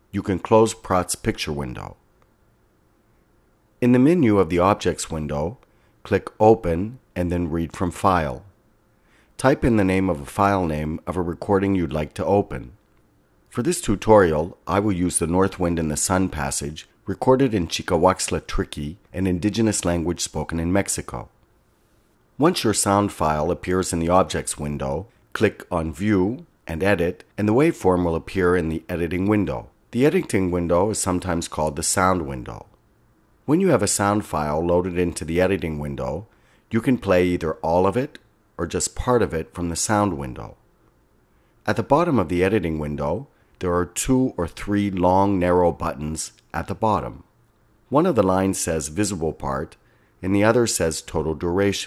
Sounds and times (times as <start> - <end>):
Speech: 0.1 - 2.0, 3.8 - 8.6, 9.4 - 12.8, 13.5 - 21.4, 22.4 - 32.8, 33.5 - 40.6, 41.6 - 47.3, 47.9 - 51.8.